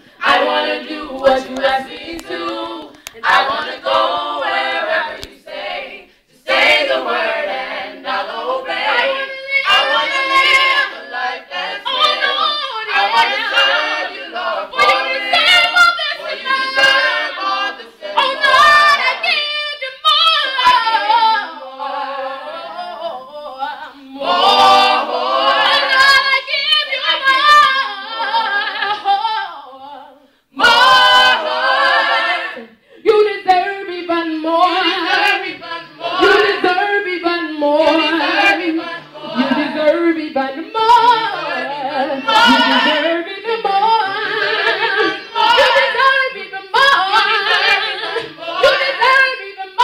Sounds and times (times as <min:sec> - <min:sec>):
Female singing: 0:00.2 - 0:49.8.